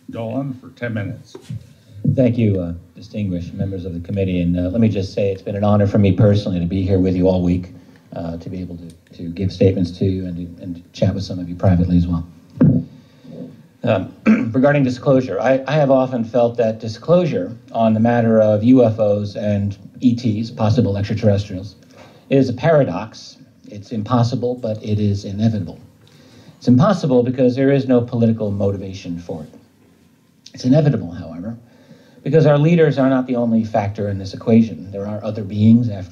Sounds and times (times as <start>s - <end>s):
Male speech, man speaking: 0.0s - 12.4s, 13.3s - 25.9s, 26.6s - 29.7s, 30.5s - 31.6s, 32.2s - 36.1s
Narration, monologue: 0.0s - 36.1s.